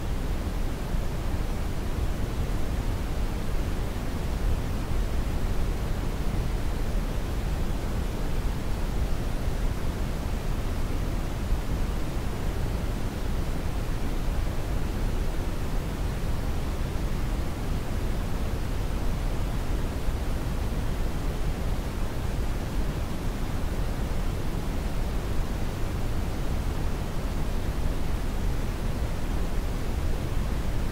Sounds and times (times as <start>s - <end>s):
White noise: 0.0s - 30.9s.